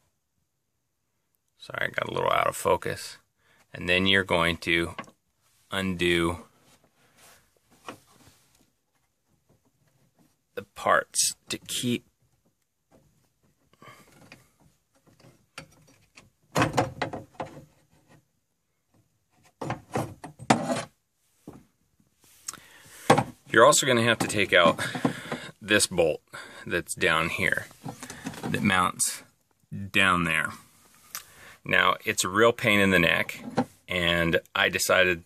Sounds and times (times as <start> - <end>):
Speech: 1.6 - 5.0, 5.7 - 6.5, 10.6 - 12.1, 23.5 - 24.9, 25.5 - 27.8, 28.4 - 30.7, 31.6 - 35.2.